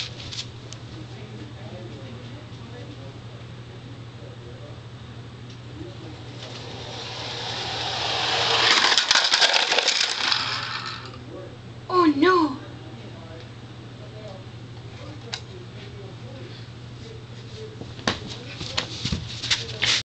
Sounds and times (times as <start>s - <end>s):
Speech: 0.8s - 4.9s, 11.2s - 20.0s.